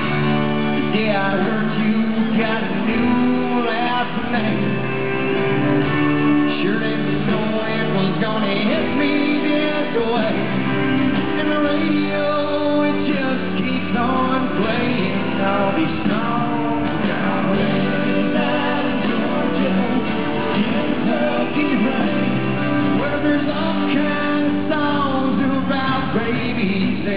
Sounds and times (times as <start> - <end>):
Music: 0.0 - 27.1.